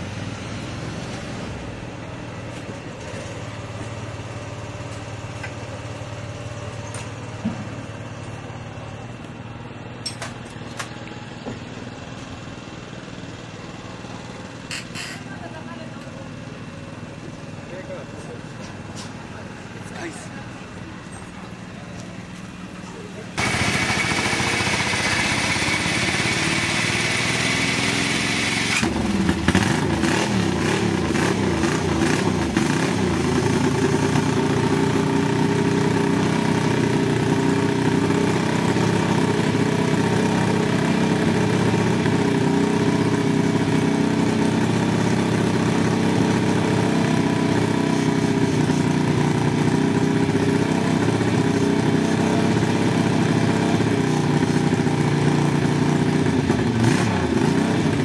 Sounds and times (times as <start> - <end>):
Vehicle: 0.0 - 58.0
Speech: 17.6 - 20.6, 22.8 - 23.4.